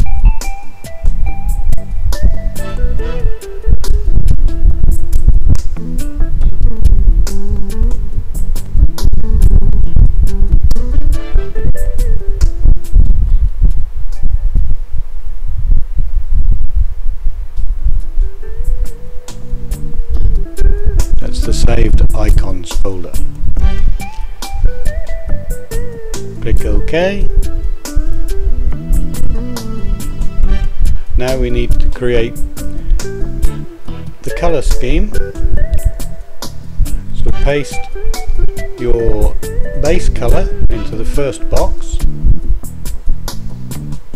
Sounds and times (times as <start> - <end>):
Music: 0.0 - 15.0, 17.6 - 44.1.